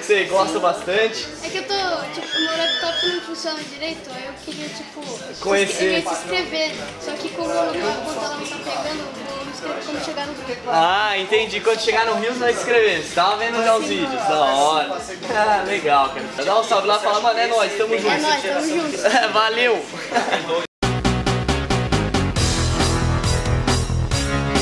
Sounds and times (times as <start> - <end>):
Music: 0.0 - 18.3, 20.8 - 24.6
Speech: 0.0 - 20.6.